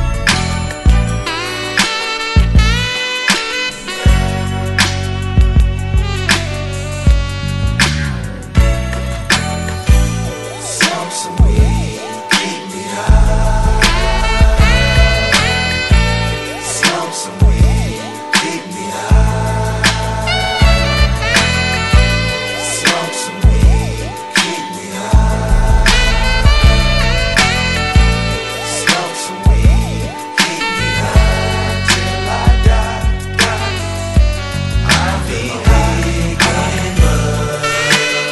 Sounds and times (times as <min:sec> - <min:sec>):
Music: 0:00.0 - 0:38.3.